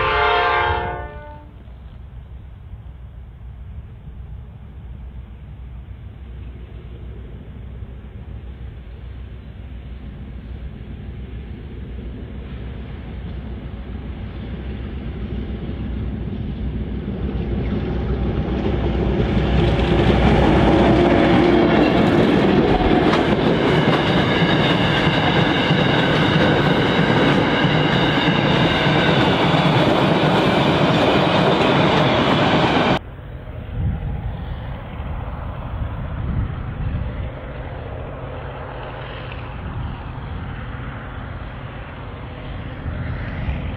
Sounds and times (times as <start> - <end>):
Railroad car, train wagon: 0.0 - 43.7
Train: 0.0 - 43.7
Clickety-clack: 18.4 - 33.0.